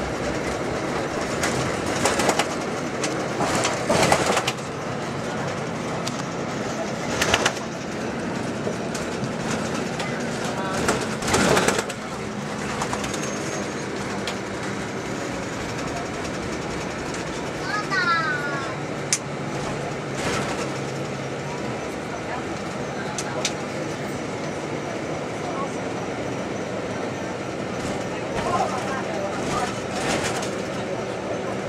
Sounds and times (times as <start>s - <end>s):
Speech: 17.6s - 18.8s, 28.1s - 29.9s.